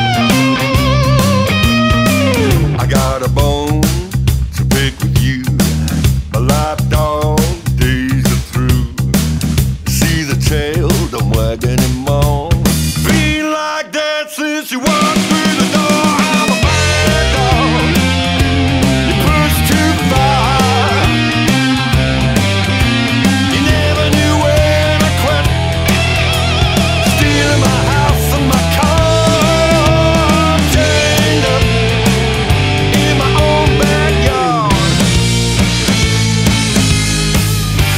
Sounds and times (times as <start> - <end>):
Music: 0.0 - 37.9.